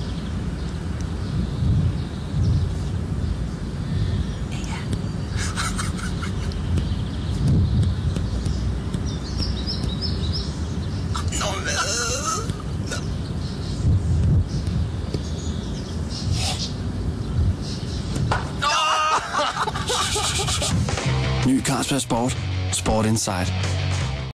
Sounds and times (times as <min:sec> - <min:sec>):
Music: 0:20.6 - 0:24.3
Speech: 0:21.4 - 0:23.6.